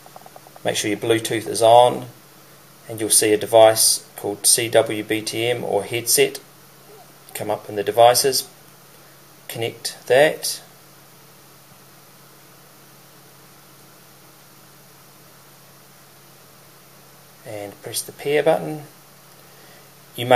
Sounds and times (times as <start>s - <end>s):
Inside, small room: 0.0s - 20.3s
Speech: 0.6s - 2.2s, 2.8s - 6.5s, 7.3s - 8.5s, 9.5s - 10.7s, 17.4s - 19.0s.